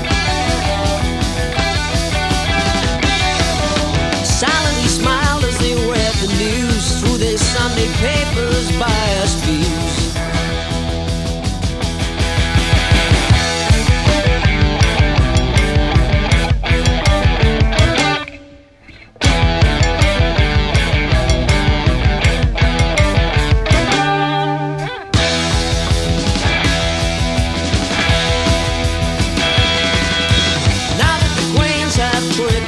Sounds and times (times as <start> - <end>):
Grunge: 0.0 - 32.6.